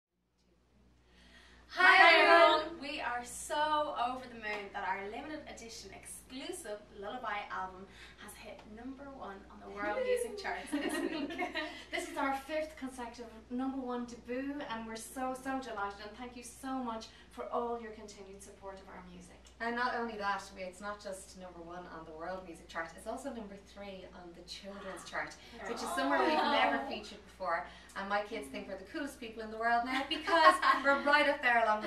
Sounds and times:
Female speech, woman speaking: 1.8 - 31.8.

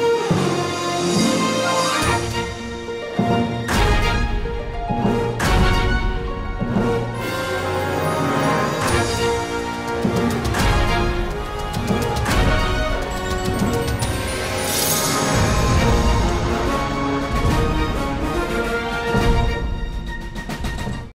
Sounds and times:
Music: 0.0 - 21.1.

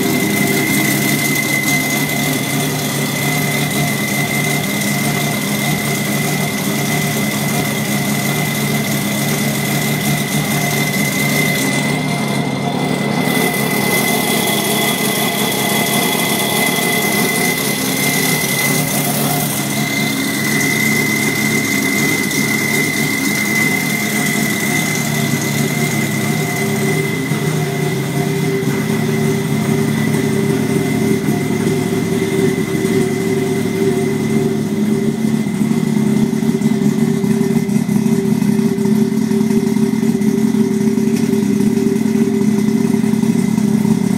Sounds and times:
Car: 0.0 - 44.1.

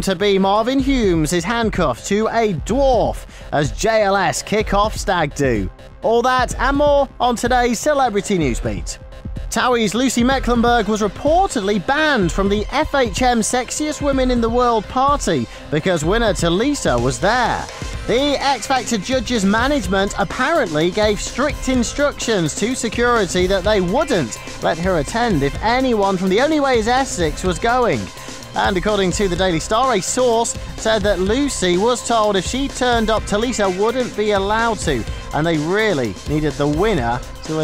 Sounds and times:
Music: 0.0 - 37.6
Speech: 0.0 - 37.6.

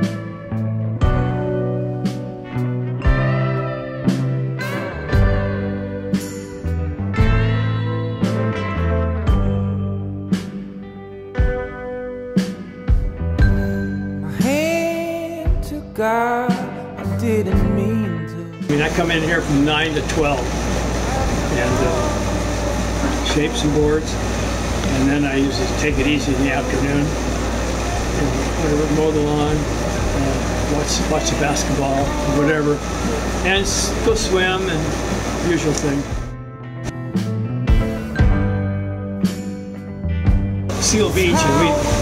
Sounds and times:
Speech: 14.4 - 16.6, 17.2 - 20.5, 21.5 - 22.2, 23.2 - 24.2, 24.9 - 27.1, 28.2 - 32.8, 33.4 - 36.0, 40.8 - 42.0.

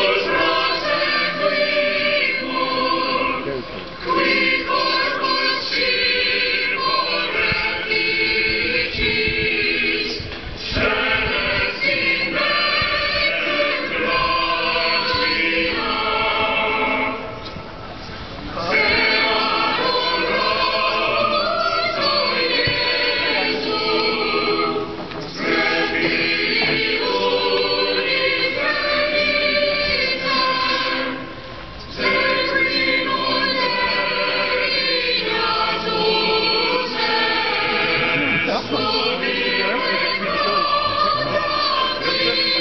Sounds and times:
Choir: 0.0 - 17.6, 18.5 - 42.6
Speech: 3.4 - 3.8, 37.6 - 42.6.

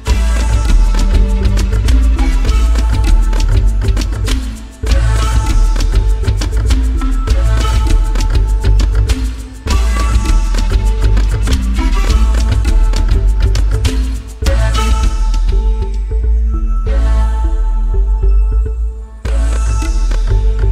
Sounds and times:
Music: 0.0 - 20.7.

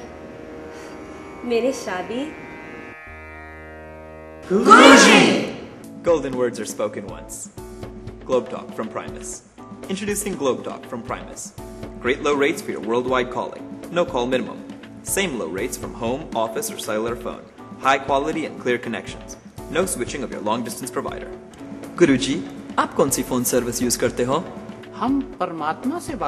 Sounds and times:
Music: 0.0 - 26.2.

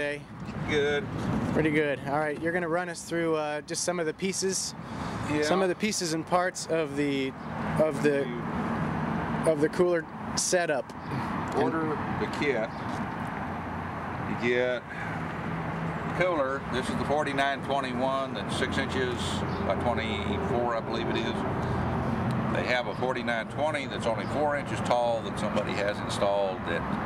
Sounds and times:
Speech: 5.3 - 8.4, 9.4 - 10.9, 11.5 - 12.7, 16.2 - 21.4, 22.5 - 26.8.

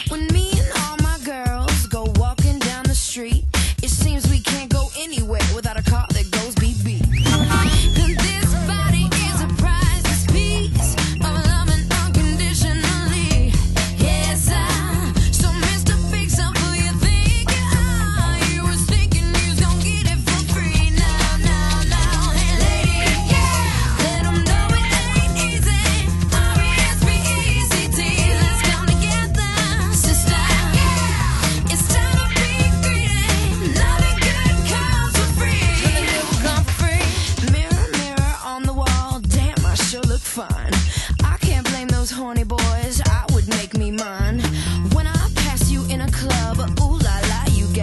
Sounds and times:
Disco: 0.0 - 47.8
Pop music: 0.0 - 47.8.

